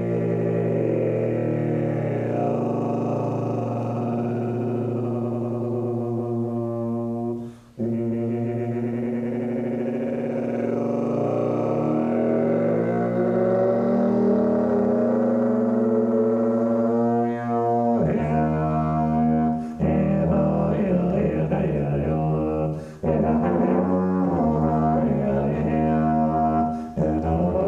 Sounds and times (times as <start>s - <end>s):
Brass instrument: 0.0s - 27.6s.